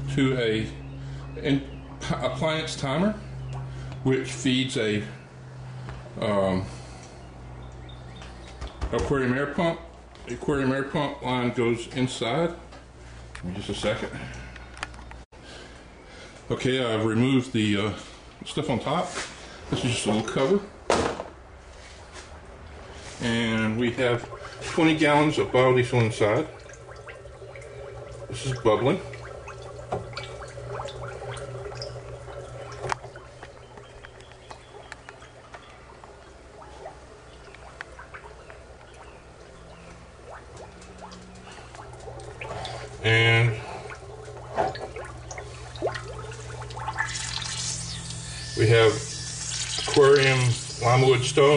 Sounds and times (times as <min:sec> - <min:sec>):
Speech: 0:00.1 - 0:00.8, 0:01.4 - 0:03.2, 0:04.1 - 0:05.2, 0:06.2 - 0:06.7, 0:08.9 - 0:12.6, 0:13.4 - 0:14.2, 0:16.5 - 0:20.7, 0:23.2 - 0:26.6, 0:28.3 - 0:29.1, 0:43.0 - 0:43.6, 0:48.6 - 0:49.1, 0:50.0 - 0:51.5
Drip: 0:26.0 - 0:42.9.